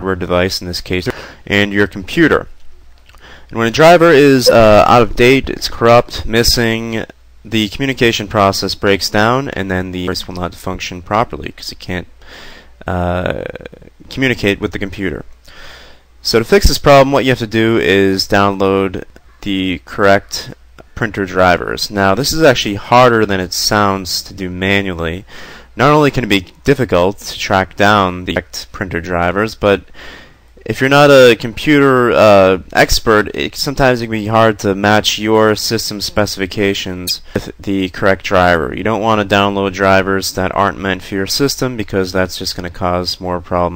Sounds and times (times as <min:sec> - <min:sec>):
Speech: 0:00.0 - 0:02.6, 0:03.5 - 0:12.1, 0:12.8 - 0:15.3, 0:16.2 - 0:29.9, 0:30.6 - 0:43.7.